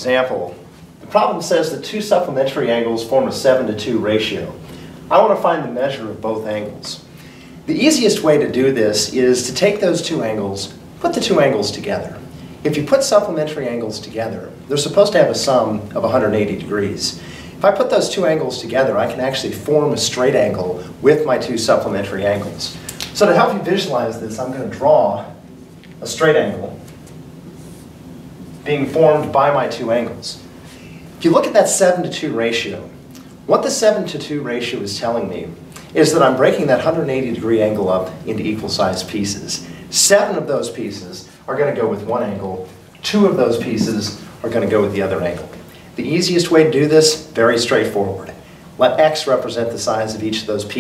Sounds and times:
Speech: 0:00.0 - 0:07.1, 0:07.7 - 0:25.4, 0:26.0 - 0:26.9, 0:28.6 - 0:30.5, 0:31.2 - 0:50.8.

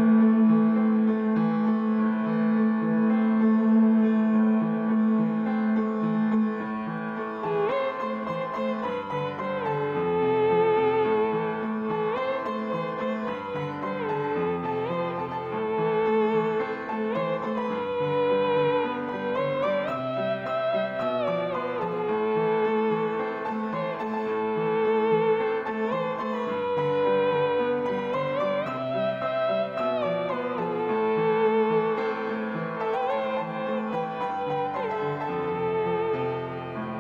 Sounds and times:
Piano: 0:00.0 - 0:37.0.

